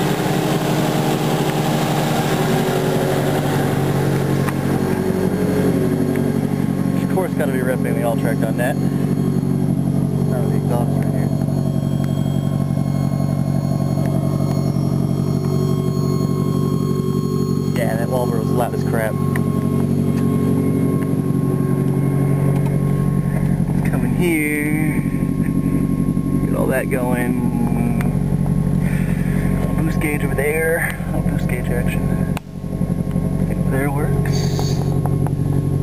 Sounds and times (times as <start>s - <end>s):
Speech: 7.0s - 8.8s, 10.2s - 11.3s, 17.7s - 19.2s, 23.8s - 25.2s, 26.4s - 28.2s, 29.7s - 32.2s, 33.6s - 35.0s.